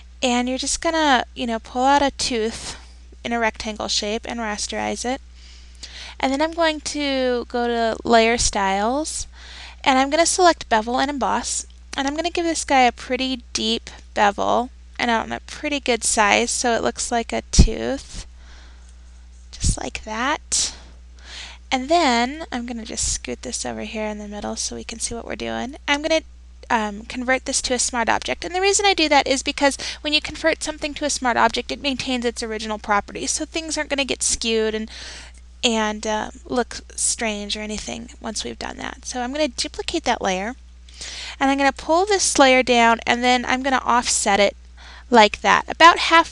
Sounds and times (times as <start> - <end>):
Speech: 0.2 - 5.2, 6.2 - 18.3, 19.5 - 20.8, 21.7 - 34.9, 35.6 - 40.6, 41.4 - 46.3.